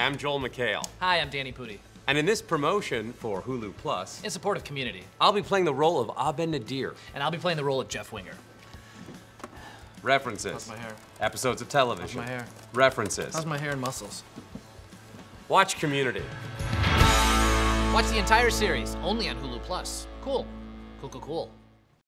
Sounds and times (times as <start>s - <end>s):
Music: 0.0s - 22.0s
Speech: 18.0s - 21.6s.